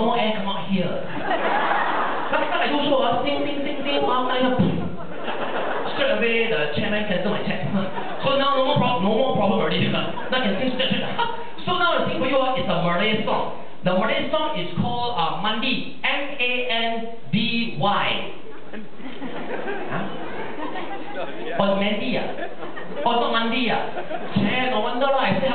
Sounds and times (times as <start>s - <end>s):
Speech: 0.0s - 1.1s, 2.3s - 5.0s, 5.9s - 18.4s, 21.0s - 22.4s, 23.0s - 25.5s.